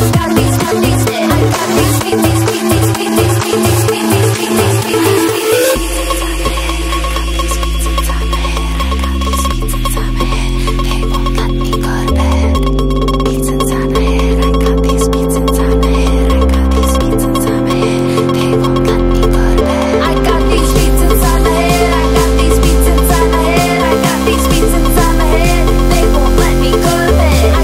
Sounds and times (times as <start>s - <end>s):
Music: 0.0s - 27.6s.